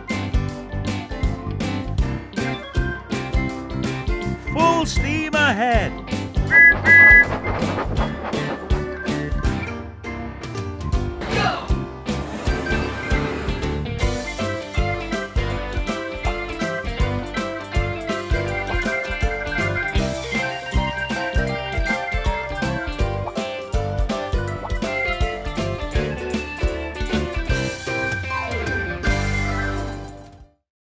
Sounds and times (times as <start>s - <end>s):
Music: 0.0s - 30.7s.